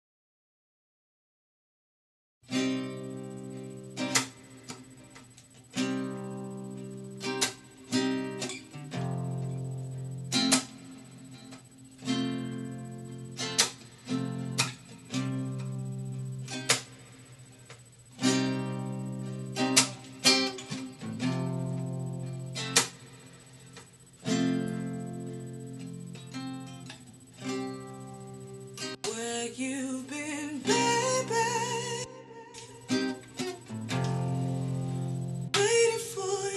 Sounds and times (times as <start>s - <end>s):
Guitar: 2.4s - 36.5s
Inside, small room: 2.4s - 36.5s.